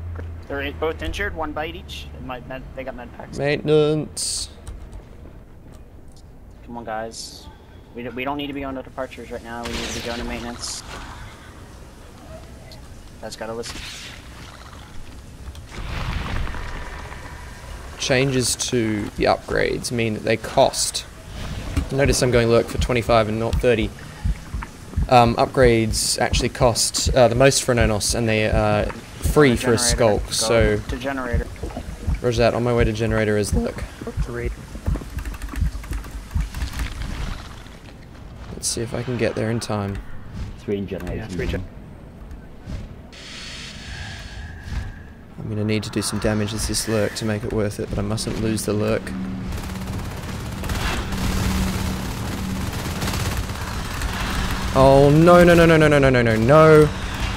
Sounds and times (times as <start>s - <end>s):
Speech: 21.9s - 23.9s, 25.1s - 31.5s, 32.2s - 34.6s, 45.4s - 49.1s, 54.8s - 56.9s.